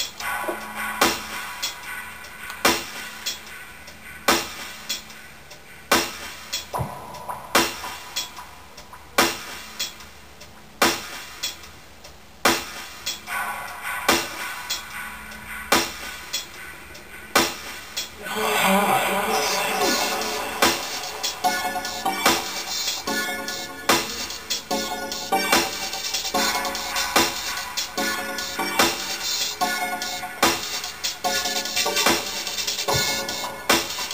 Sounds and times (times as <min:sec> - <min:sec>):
Electronic music: 0:00.0 - 0:10.1, 0:12.6 - 0:34.1.